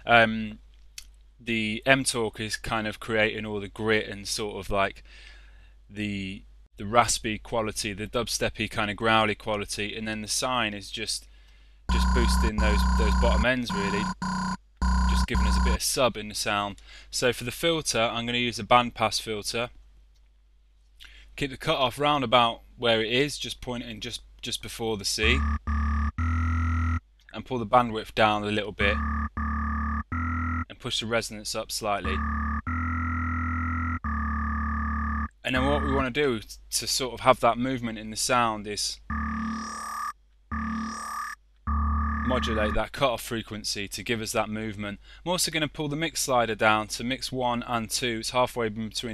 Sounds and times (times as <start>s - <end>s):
Speech: 0.0s - 0.6s, 1.4s - 5.0s, 5.9s - 11.3s, 11.9s - 14.1s, 15.1s - 19.7s, 21.4s - 25.4s, 27.3s - 29.0s, 30.7s - 32.2s, 35.4s - 39.0s, 42.3s - 49.1s
Electronic music: 11.9s - 15.8s, 25.2s - 27.0s, 28.8s - 30.6s, 32.1s - 36.1s, 39.1s - 42.8s
Synthesizer: 25.2s - 27.0s, 28.8s - 30.6s, 32.1s - 36.1s, 39.1s - 42.8s.